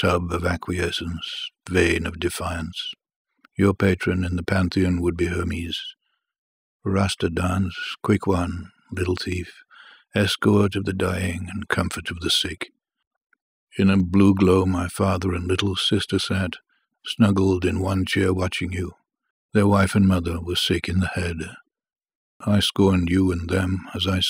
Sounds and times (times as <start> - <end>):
Speech: 0.0 - 6.0, 6.8 - 12.7, 13.8 - 19.0, 19.6 - 21.6, 22.4 - 24.2.